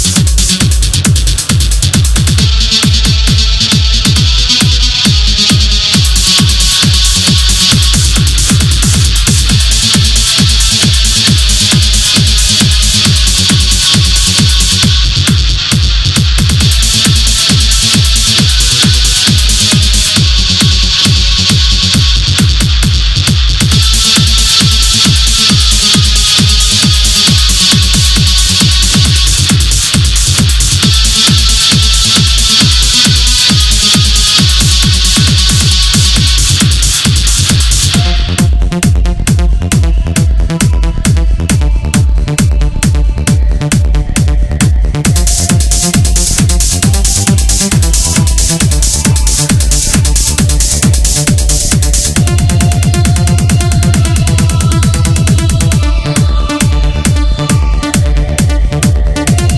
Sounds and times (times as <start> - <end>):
Techno: 0.0 - 59.5.